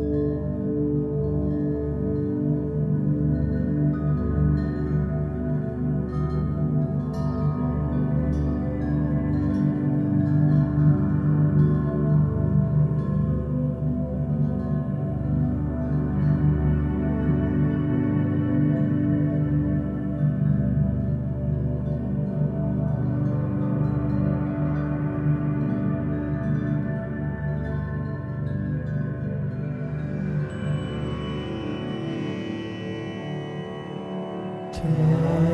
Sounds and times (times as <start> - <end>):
Music: 0.0 - 35.5.